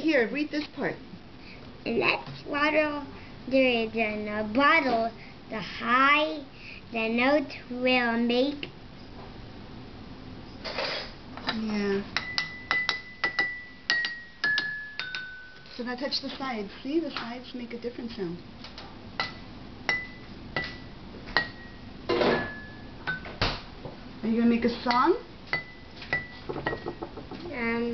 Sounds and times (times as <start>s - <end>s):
Glass: 12.2s - 15.7s, 25.6s - 27.2s
Speech: 15.8s - 18.4s.